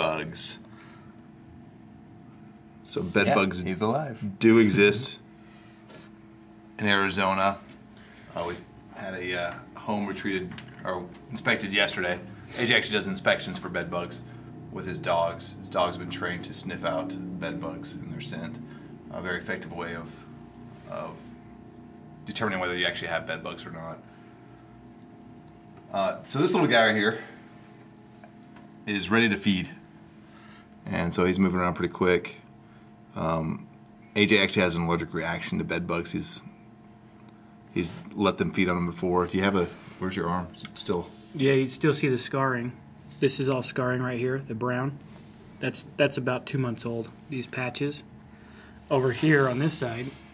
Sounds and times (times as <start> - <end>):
Speech: 2.9 - 5.2, 8.3 - 14.2, 25.9 - 27.2, 28.9 - 29.8, 30.8 - 32.4, 34.2 - 36.5, 37.8 - 45.0, 45.6 - 48.0, 48.9 - 50.2.